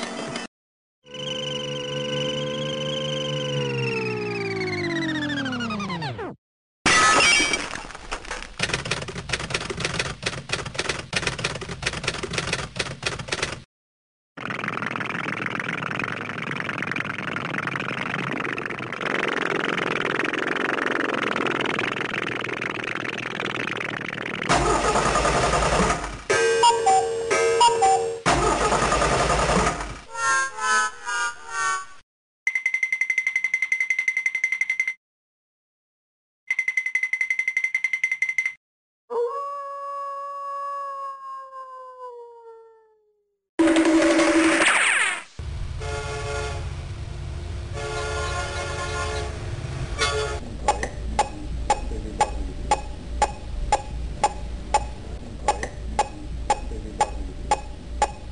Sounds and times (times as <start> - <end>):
Sound effect: 0.0 - 8.8, 14.4 - 32.0, 43.6 - 45.6.